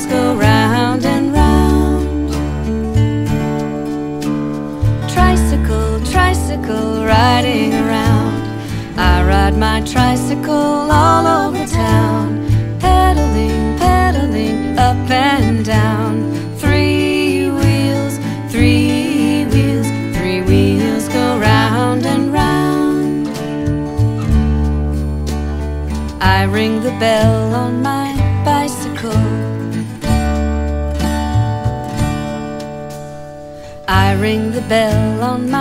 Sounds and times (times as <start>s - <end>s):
Music: 0.0s - 35.6s.